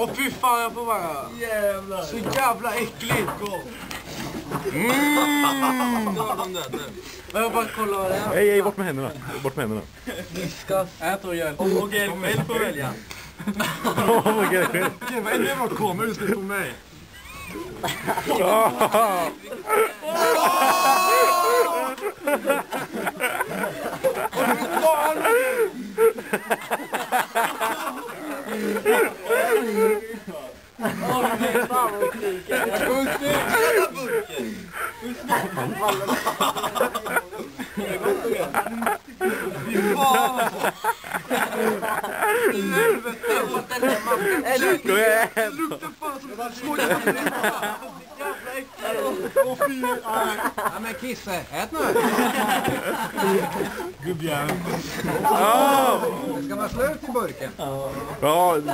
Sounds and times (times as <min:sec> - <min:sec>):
Speech: 0:28.1 - 0:40.7.